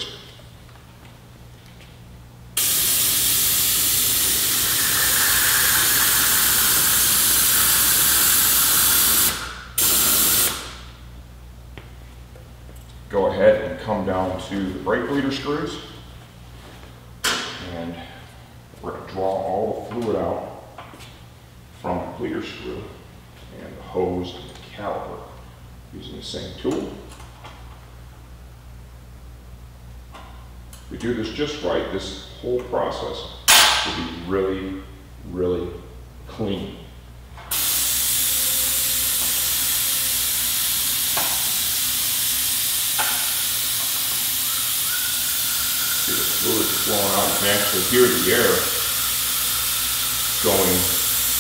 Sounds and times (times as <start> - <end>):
Steam: 2.6 - 10.7, 37.5 - 51.4
Speech: 13.1 - 16.0, 17.6 - 18.2, 18.8 - 20.6, 21.8 - 27.1, 30.9 - 36.9, 46.1 - 48.8, 50.4 - 51.0.